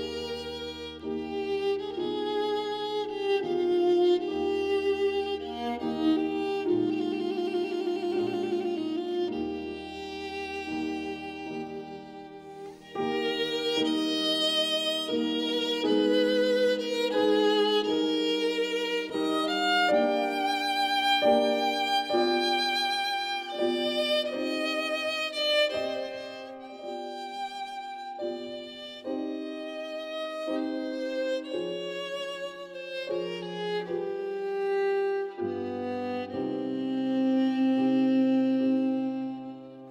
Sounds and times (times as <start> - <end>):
Violin, fiddle: 0.0 - 39.9.